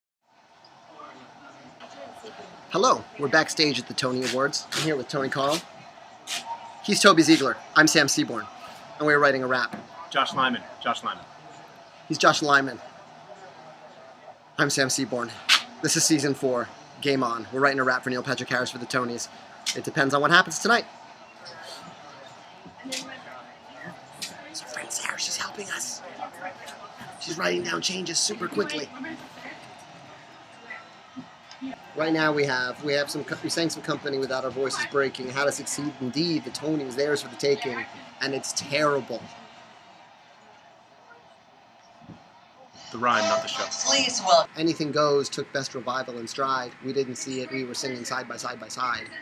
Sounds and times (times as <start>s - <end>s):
Speech: 0.9s - 5.7s, 6.9s - 11.2s, 12.1s - 12.8s, 14.6s - 20.9s, 22.9s - 29.2s, 32.0s - 39.3s, 43.0s - 49.2s.